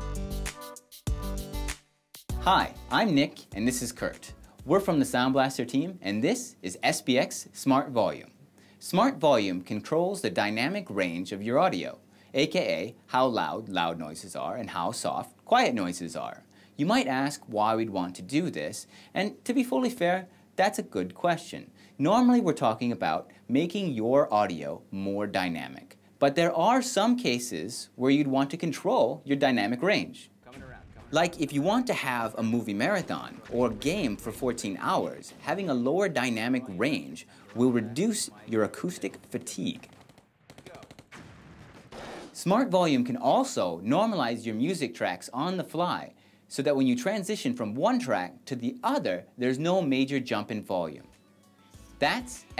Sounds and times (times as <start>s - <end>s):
Speech: 2.4s - 39.9s, 42.4s - 51.1s, 52.0s - 52.5s.